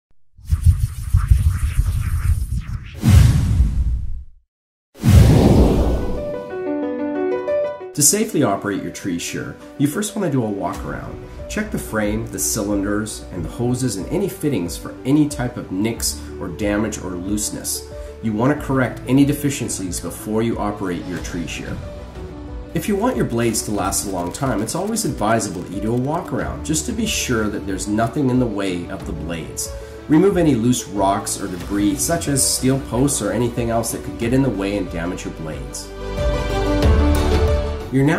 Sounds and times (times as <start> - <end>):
Music: 6.0 - 38.1
Speech: 8.0 - 21.8, 22.8 - 35.9, 37.9 - 38.1.